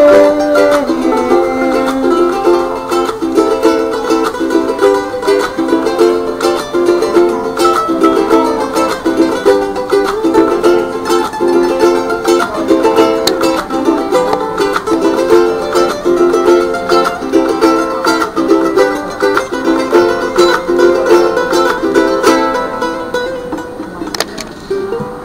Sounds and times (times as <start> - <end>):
Ukulele: 0.0 - 25.2.